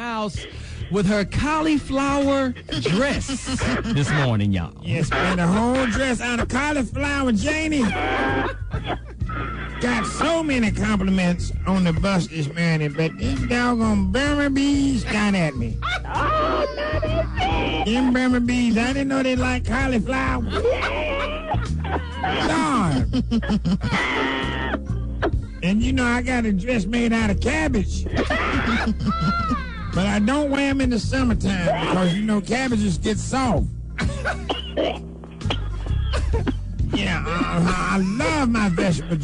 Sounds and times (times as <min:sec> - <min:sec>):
Speech: 0:00.0 - 0:08.0, 0:09.8 - 0:15.8, 0:17.8 - 0:20.6, 0:30.0 - 0:33.7, 0:36.9 - 0:39.2
Music: 0:00.0 - 0:39.2.